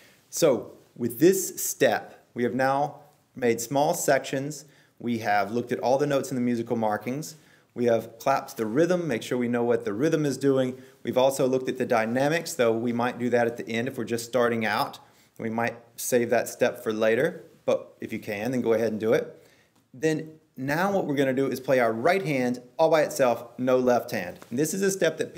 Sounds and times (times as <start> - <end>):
Speech: 0.3 - 25.3.